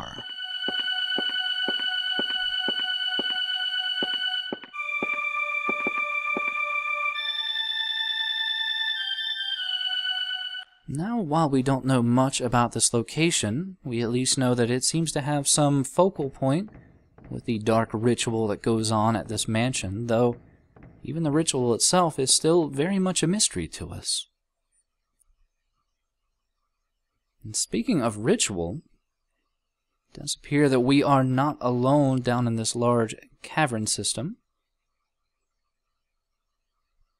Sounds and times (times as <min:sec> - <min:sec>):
Speech: 0:00.0 - 0:00.2, 0:10.9 - 0:16.7, 0:17.3 - 0:20.4, 0:21.1 - 0:24.3, 0:27.5 - 0:28.9, 0:30.2 - 0:34.4.